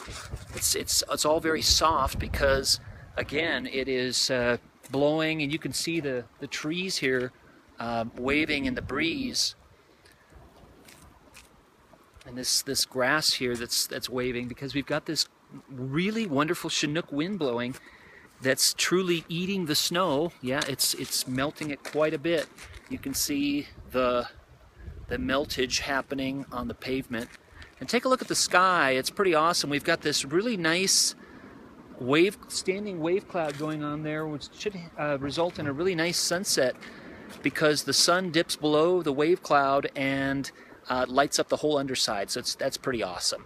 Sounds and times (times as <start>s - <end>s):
Speech: 0.5s - 9.6s, 12.3s - 17.8s, 18.4s - 24.4s, 25.1s - 31.2s, 32.0s - 36.8s, 37.4s - 43.4s.